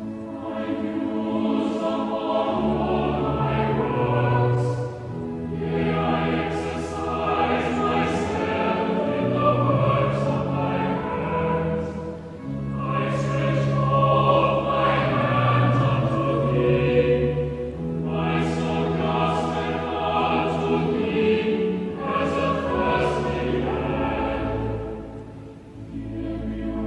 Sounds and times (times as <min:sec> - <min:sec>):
Chant: 0:00.0 - 0:26.8
Choir: 0:00.0 - 0:26.8
Opera: 0:00.0 - 0:26.8.